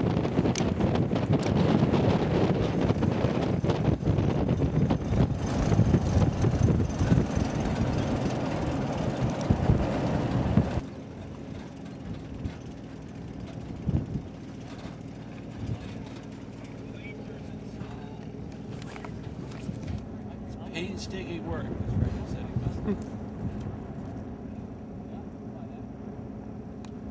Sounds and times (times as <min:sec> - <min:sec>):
Wind noise (microphone): 0:00.0 - 0:10.8, 0:13.6 - 0:14.4, 0:21.5 - 0:23.9.